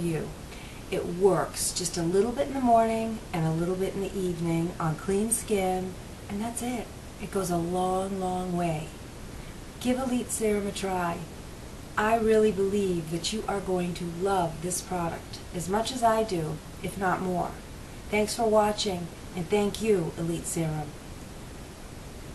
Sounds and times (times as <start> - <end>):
Speech: 0.0 - 9.0, 9.8 - 11.3, 12.0 - 21.0.